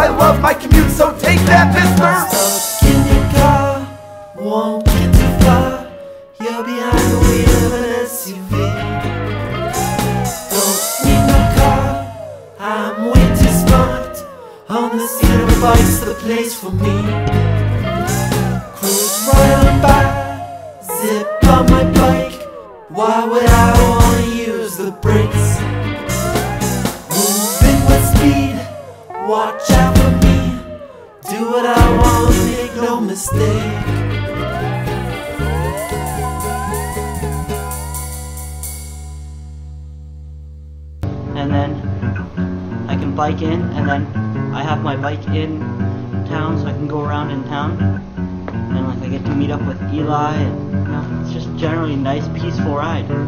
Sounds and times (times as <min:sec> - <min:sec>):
Speech: 0:00.0 - 0:02.7, 0:41.4 - 0:41.8, 0:42.9 - 0:45.6, 0:46.3 - 0:47.8, 0:48.7 - 0:53.2
Music: 0:00.0 - 0:53.2.